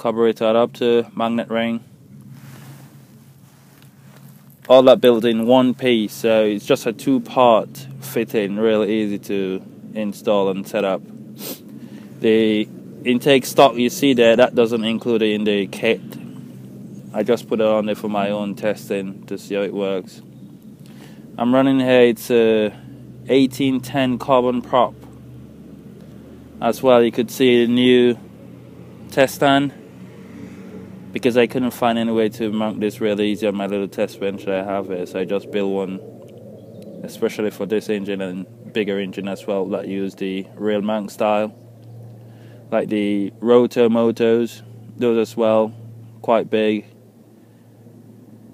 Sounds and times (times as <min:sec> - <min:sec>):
Speech: 0:00.0 - 0:01.8, 0:04.7 - 0:11.0, 0:12.2 - 0:16.2, 0:17.1 - 0:20.2, 0:21.4 - 0:25.0, 0:26.6 - 0:28.2, 0:29.1 - 0:29.8, 0:31.2 - 0:36.0, 0:37.0 - 0:41.5, 0:42.7 - 0:46.9.